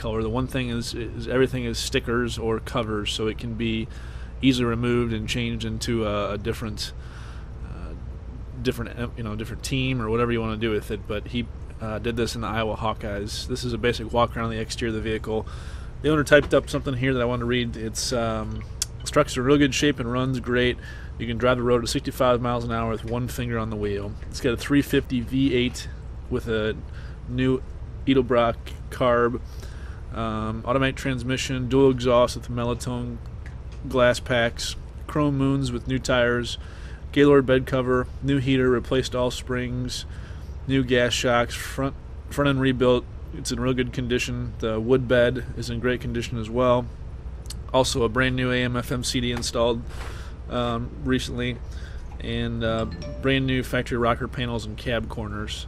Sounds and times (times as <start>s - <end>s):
Speech: 0.0s - 7.0s, 7.6s - 29.4s, 30.1s - 33.2s, 33.8s - 49.9s, 50.5s - 51.6s, 52.2s - 55.6s.